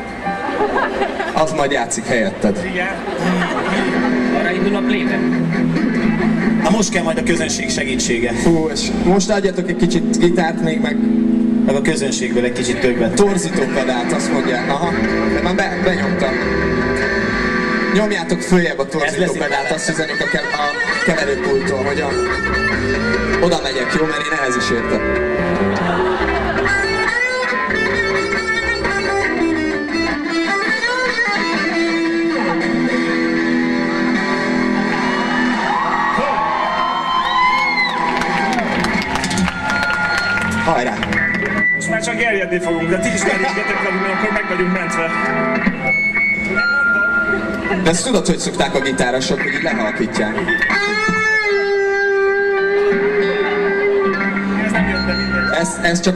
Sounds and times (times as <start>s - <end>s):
Music: 0.0s - 56.1s
Speech: 18.0s - 22.2s.